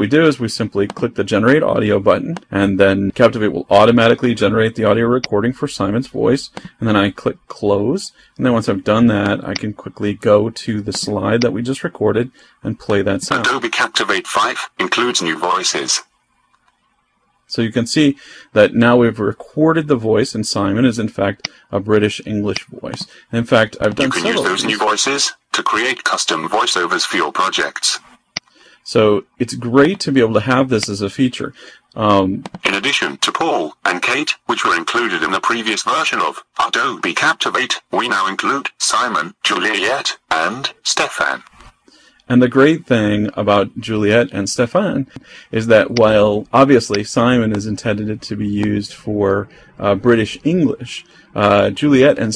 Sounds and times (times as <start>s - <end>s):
Speech synthesizer: 12.8s - 16.1s, 21.9s - 28.0s, 32.0s - 41.5s.